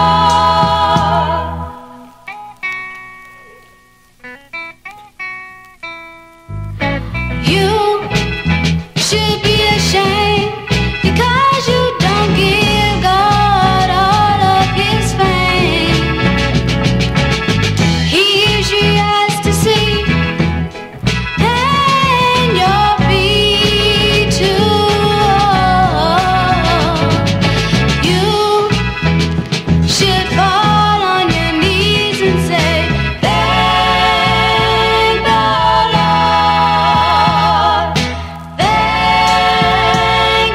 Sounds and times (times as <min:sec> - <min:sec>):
Gospel music: 0:00.0 - 0:40.5
Soul music: 0:00.0 - 0:40.5.